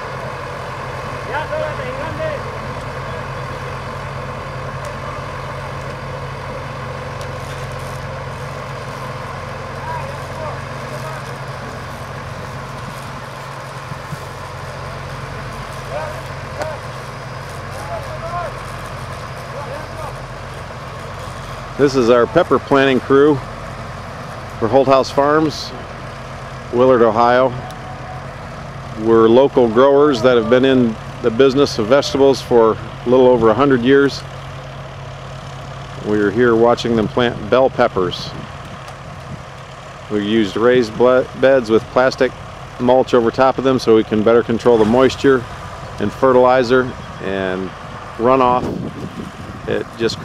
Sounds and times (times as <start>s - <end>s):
Speech: 1.2s - 3.3s, 21.8s - 23.4s, 24.6s - 25.8s, 26.7s - 27.6s, 29.0s - 34.2s, 36.0s - 38.4s, 40.1s - 48.7s, 49.7s - 50.2s.